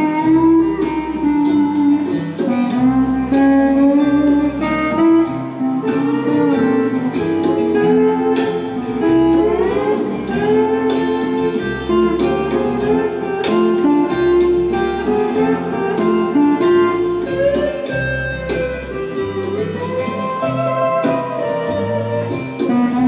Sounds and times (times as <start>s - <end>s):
Bowed string instrument: 0.0s - 23.0s.